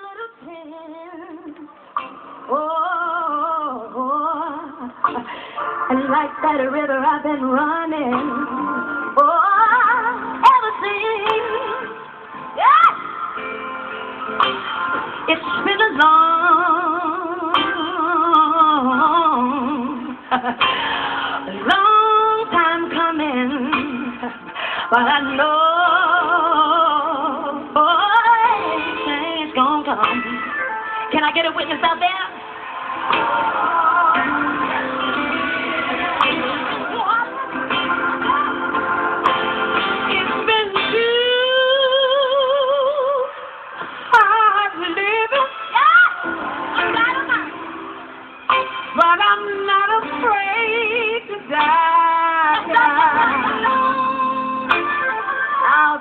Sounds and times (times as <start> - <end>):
Gospel music: 0.0 - 56.0.